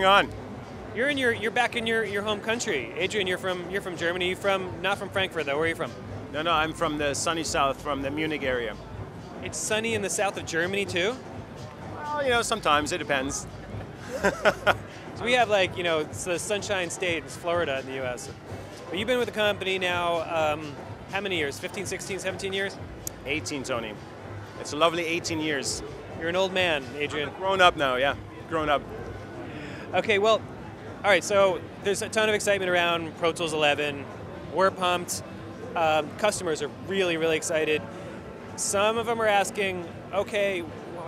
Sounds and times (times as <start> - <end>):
Music: 0.0 - 41.0
Speech: 1.0 - 8.8, 9.4 - 11.2, 12.1 - 13.5, 15.2 - 24.0, 24.6 - 28.8, 29.9 - 30.4, 31.0 - 35.2, 35.8 - 37.9, 38.6 - 41.0.